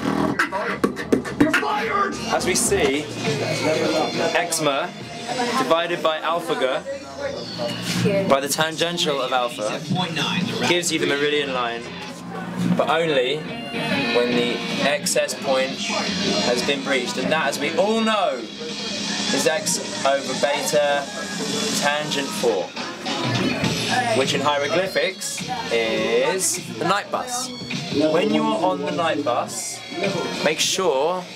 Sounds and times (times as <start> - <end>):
Music: 0.0 - 31.3.